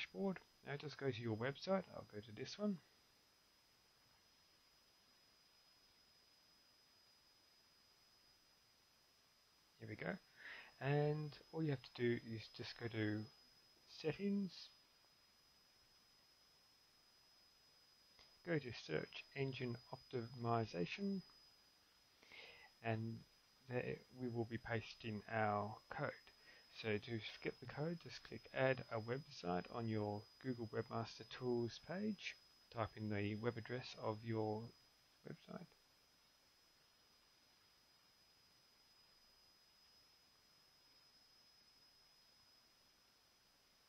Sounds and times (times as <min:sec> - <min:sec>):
Speech: 0:00.0 - 0:02.9, 0:09.8 - 0:10.2, 0:10.8 - 0:13.3, 0:13.9 - 0:14.8, 0:18.5 - 0:21.3, 0:22.8 - 0:34.7, 0:35.3 - 0:35.7.